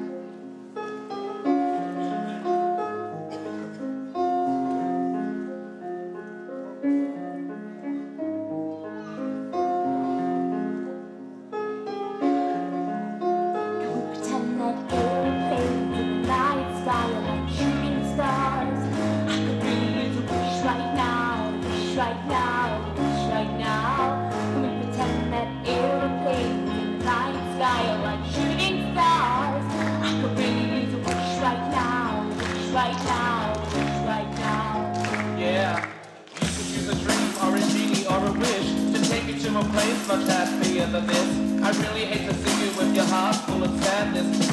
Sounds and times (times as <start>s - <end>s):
Inside, large room or hall: 0.0s - 44.5s
Music: 0.0s - 44.5s.